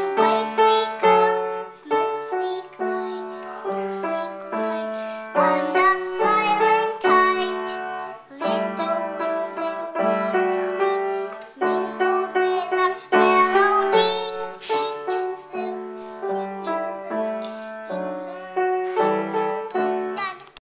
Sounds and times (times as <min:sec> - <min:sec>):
Music: 0:00.0 - 0:20.4
Child singing: 0:00.0 - 0:20.6.